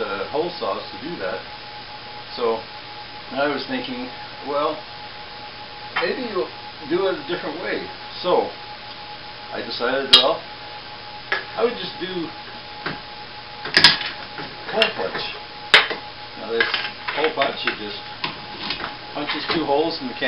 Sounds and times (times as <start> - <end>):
Speech: 0.0 - 1.4, 3.3 - 4.8, 6.0 - 8.6, 9.6 - 10.4, 11.6 - 12.3, 14.7 - 15.4, 16.4 - 18.1, 19.2 - 20.2.